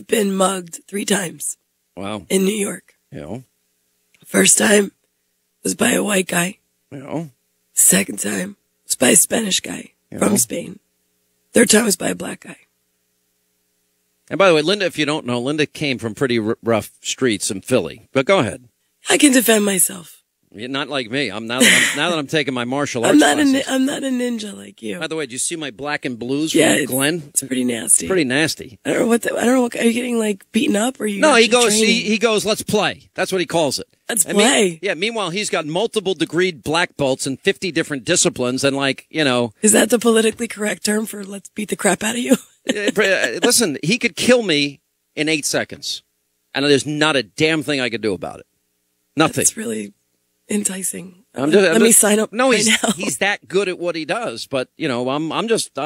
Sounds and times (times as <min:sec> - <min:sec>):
Speech: 0:00.0 - 0:03.4, 0:04.3 - 0:04.9, 0:05.7 - 0:10.8, 0:11.6 - 0:12.6, 0:14.3 - 0:46.0, 0:46.6 - 0:48.4, 0:49.2 - 0:49.9, 0:50.5 - 0:55.8.